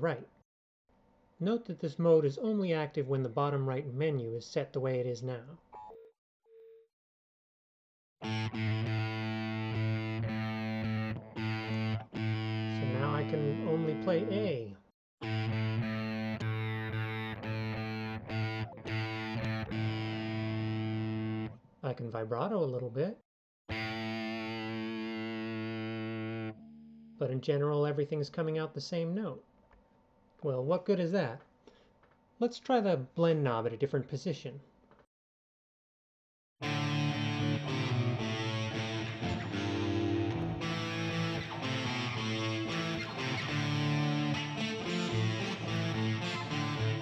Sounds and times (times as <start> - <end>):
Speech: 0.0 - 0.3, 1.4 - 5.6, 12.8 - 14.8, 21.8 - 23.2, 27.2 - 29.4, 30.4 - 31.5, 32.4 - 34.7
Electric guitar: 8.2 - 14.4, 15.2 - 21.6, 23.7 - 26.6, 36.6 - 47.0.